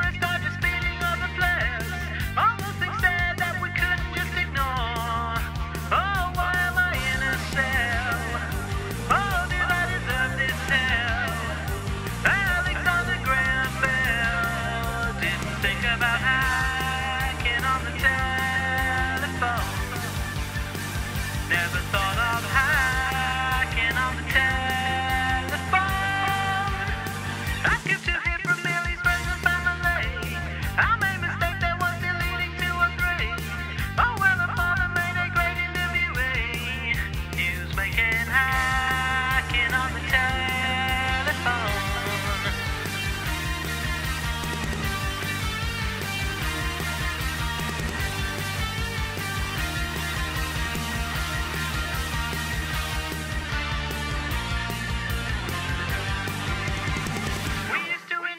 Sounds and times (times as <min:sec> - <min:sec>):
Music: 0:00.0 - 0:58.3.